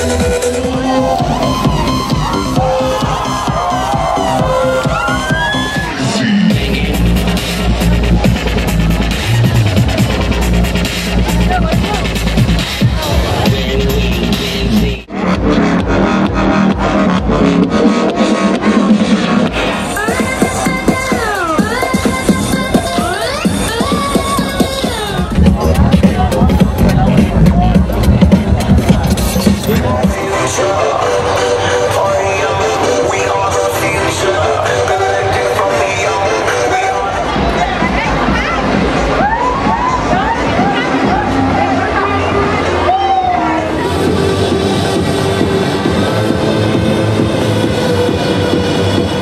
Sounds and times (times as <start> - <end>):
Exciting music: 0.0 - 49.2.